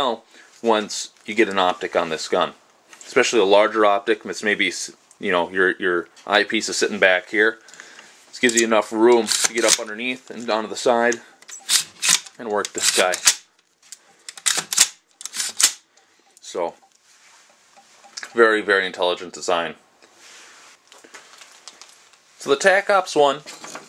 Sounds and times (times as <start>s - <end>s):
Speech: 0.0s - 7.6s, 8.3s - 11.2s, 12.4s - 13.2s, 16.4s - 16.8s, 18.3s - 19.8s, 22.4s - 23.5s.